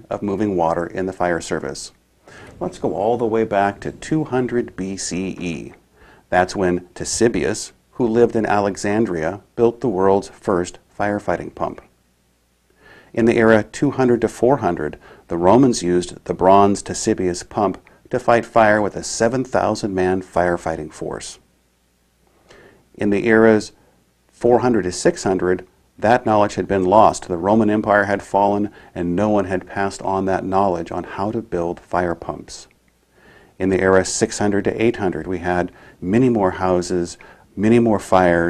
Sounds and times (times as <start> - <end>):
Speech: 0.0 - 2.0, 2.6 - 11.9, 13.1 - 21.5, 23.0 - 23.8, 24.4 - 32.7, 33.6 - 38.5.